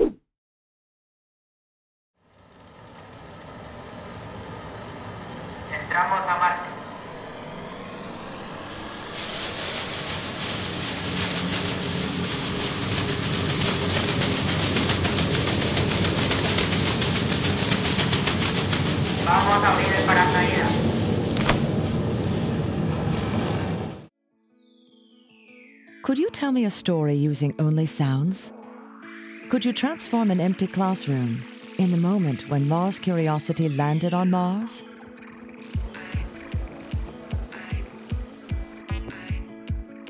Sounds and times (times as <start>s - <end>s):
Speech: 5.7s - 6.9s, 19.3s - 20.8s, 26.1s - 28.5s, 29.5s - 34.8s
Music: 8.6s - 20.9s, 24.2s - 40.1s.